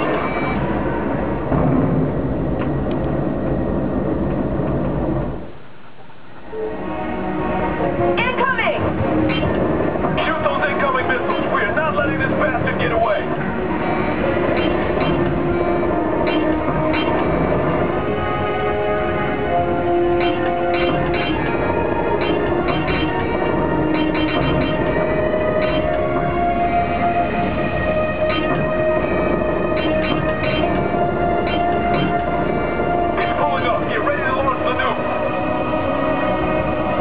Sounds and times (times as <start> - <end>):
Music: 0.0 - 5.6, 6.4 - 37.0.